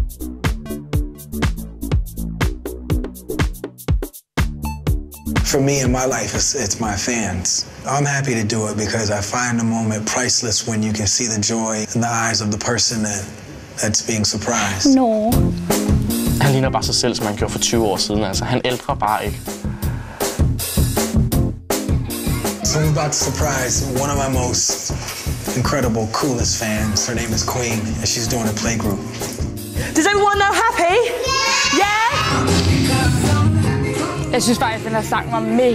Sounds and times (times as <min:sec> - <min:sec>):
Music: 0:00.0 - 0:06.6, 0:14.9 - 0:35.7
Speech: 0:16.4 - 0:19.4, 0:25.5 - 0:29.0.